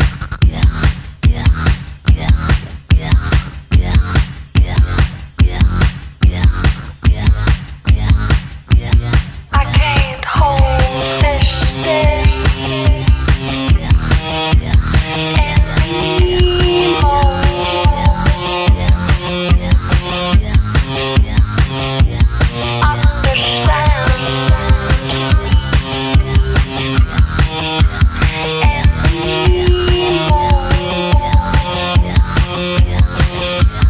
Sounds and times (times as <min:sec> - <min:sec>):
Music: 0:00.0 - 0:33.8.